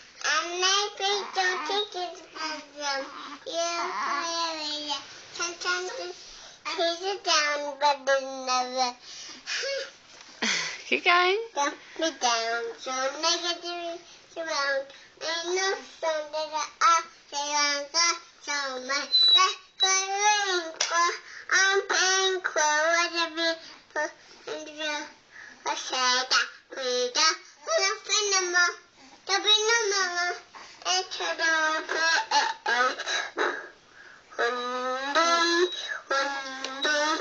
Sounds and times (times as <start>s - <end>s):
Child singing: 0.2s - 9.0s, 11.6s - 33.1s, 34.4s - 37.2s.